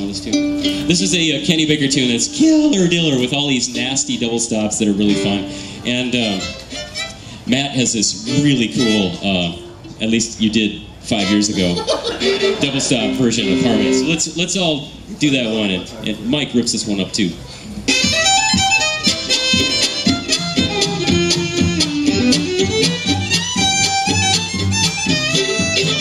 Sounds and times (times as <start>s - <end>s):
Speech: 0.0s - 6.5s, 7.5s - 11.8s, 12.6s - 17.4s
Violin, fiddle: 3.0s - 9.9s, 11.1s - 14.2s, 17.9s - 26.0s.